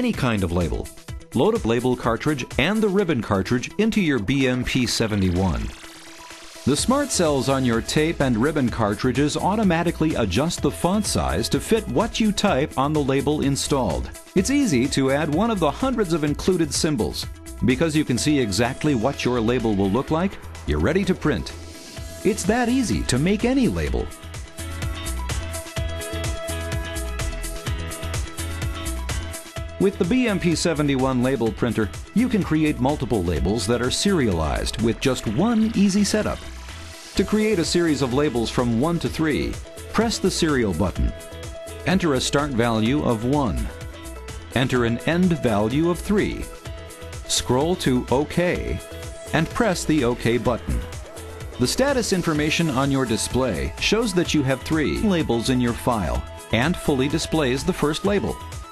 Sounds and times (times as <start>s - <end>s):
Speech: 0.0s - 5.8s, 6.7s - 21.6s, 22.2s - 24.1s, 29.8s - 36.4s, 37.2s - 41.2s, 41.8s - 43.7s, 44.6s - 46.6s, 47.3s - 50.9s, 51.6s - 58.4s
Music: 0.0s - 58.7s.